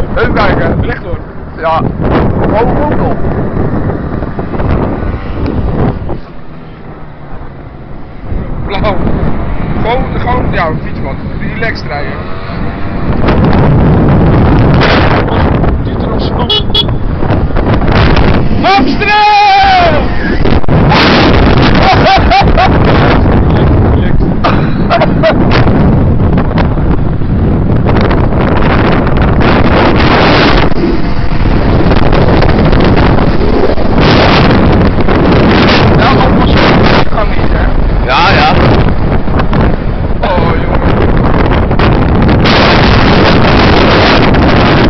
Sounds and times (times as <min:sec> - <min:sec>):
Vehicle: 0:00.0 - 0:44.9.